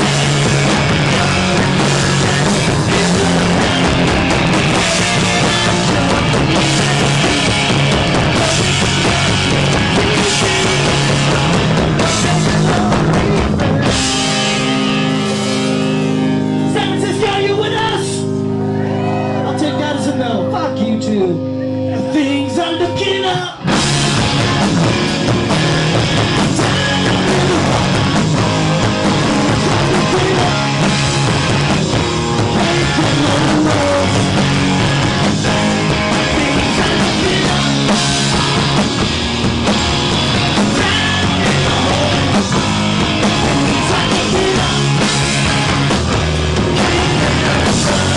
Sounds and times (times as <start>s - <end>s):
Punk rock: 0.0s - 20.2s, 21.4s - 48.1s.